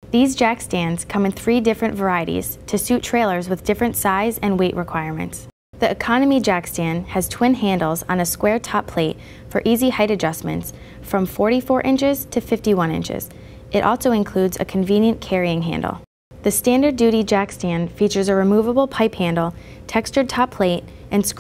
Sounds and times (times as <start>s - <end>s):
Speech: 0.1s - 21.4s.